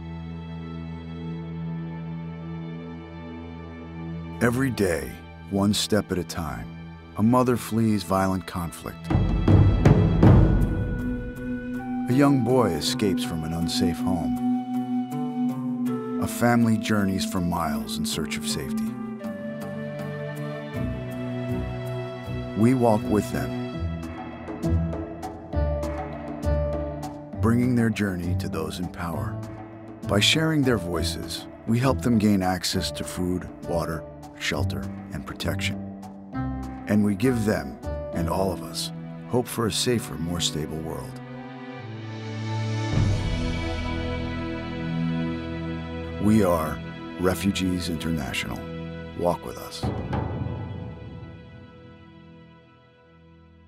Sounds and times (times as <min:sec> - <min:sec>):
Music: 0:00.0 - 0:53.6
Speech: 0:04.4 - 0:09.1, 0:12.1 - 0:14.4, 0:16.2 - 0:19.0, 0:22.6 - 0:23.6, 0:27.4 - 0:29.4, 0:30.1 - 0:35.8, 0:36.9 - 0:41.2, 0:46.2 - 0:49.9.